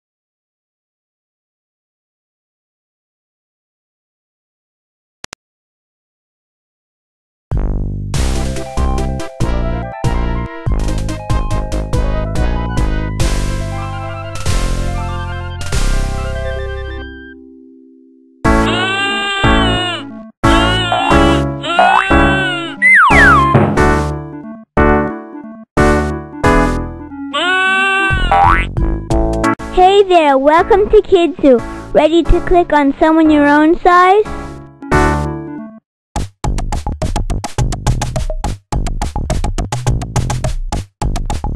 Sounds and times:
Music: 7.5 - 41.5.

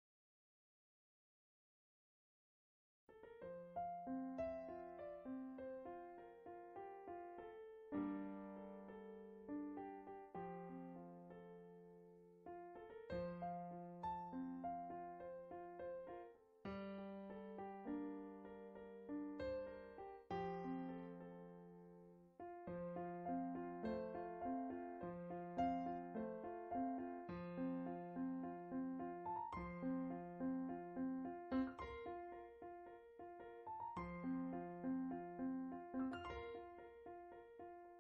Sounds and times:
Music: 3.1 - 38.0.

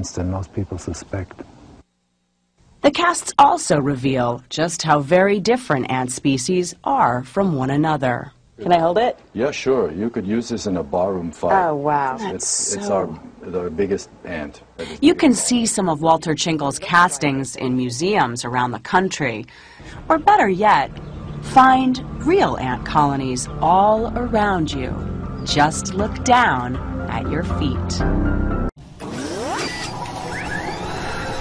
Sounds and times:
Speech: 0.0 - 1.4, 2.8 - 19.5, 20.1 - 20.9, 21.5 - 28.0.

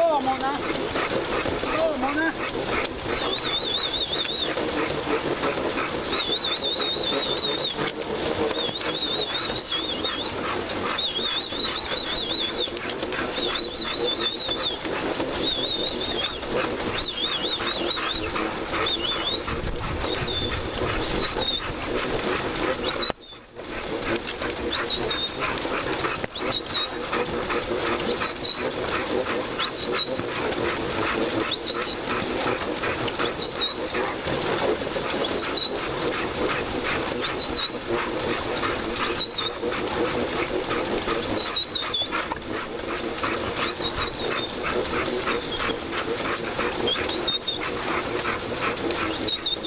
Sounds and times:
Whimper (dog): 6.1 - 8.0, 41.3 - 42.1, 49.0 - 49.6.

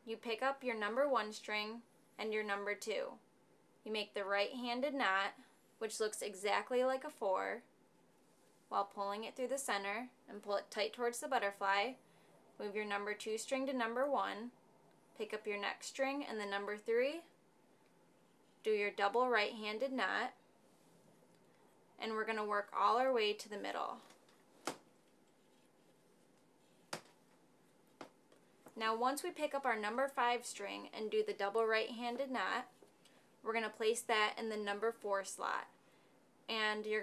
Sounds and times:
Speech: 0.0 - 3.2, 3.9 - 7.7, 8.7 - 12.0, 12.6 - 14.6, 15.2 - 17.3, 18.6 - 20.4, 22.0 - 24.1, 28.8 - 32.8, 33.5 - 35.7, 36.5 - 37.0.

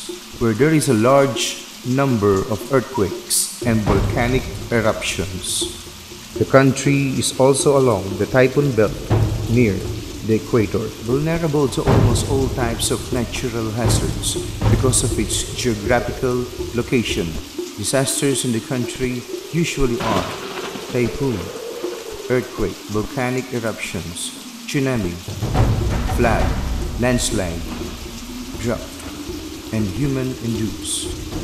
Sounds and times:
Water: 0.0 - 31.4.

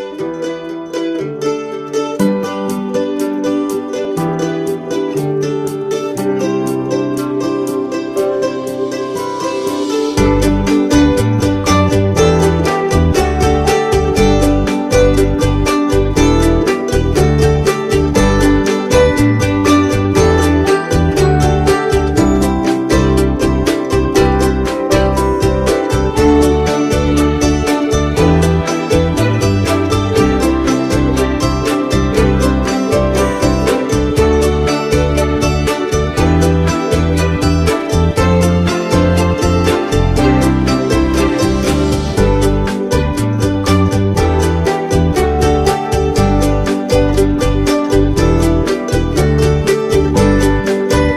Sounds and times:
Music: 0.0 - 51.1.

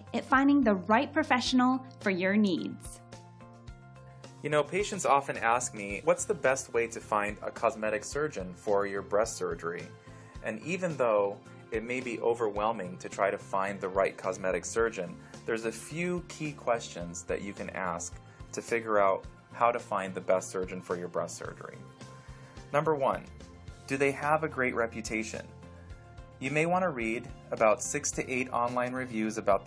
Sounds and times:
Music: 0.0 - 29.6
Speech: 0.1 - 3.0, 4.4 - 21.8, 22.7 - 23.3, 23.9 - 25.5, 26.4 - 29.6.

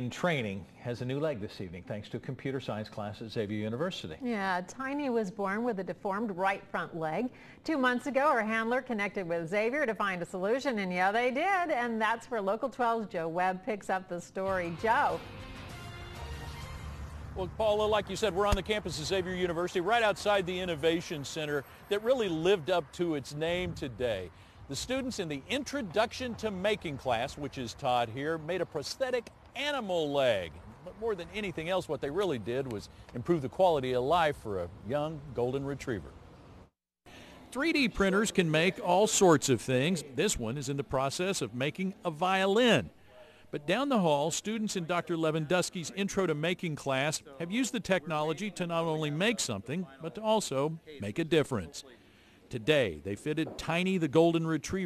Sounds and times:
Music: 14.5 - 21.4
Speech: 17.4 - 36.1, 37.5 - 54.8.

